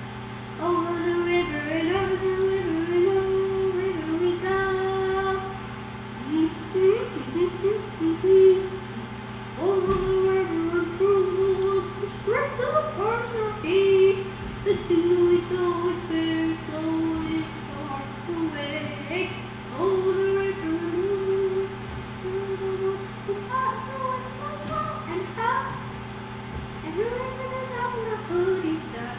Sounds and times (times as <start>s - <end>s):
Child singing: 9.6s - 25.8s, 26.8s - 29.1s.